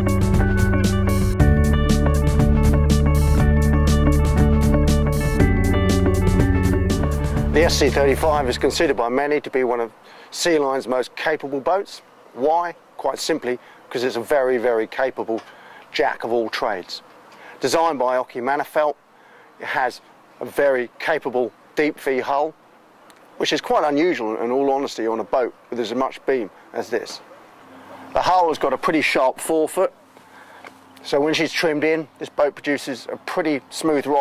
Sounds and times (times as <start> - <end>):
Speech: 7.6 - 17.0, 17.6 - 19.0, 19.6 - 22.6, 23.4 - 27.3, 28.2 - 30.0, 31.0 - 34.2.